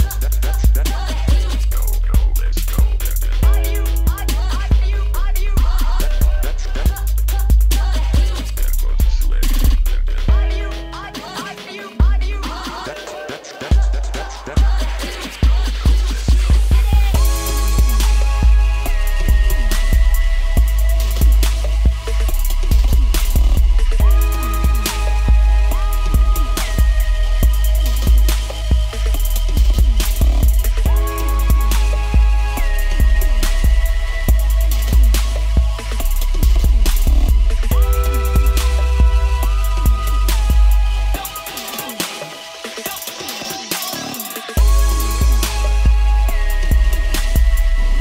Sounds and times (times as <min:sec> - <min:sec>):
Music: 0:00.0 - 0:48.0.